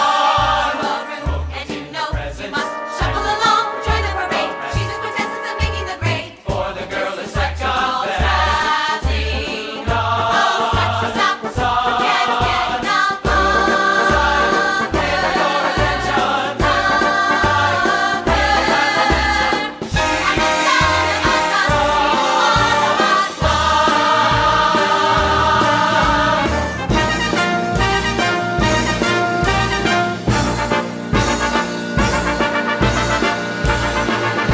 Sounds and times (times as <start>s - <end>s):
Swing music: 0.0s - 34.5s.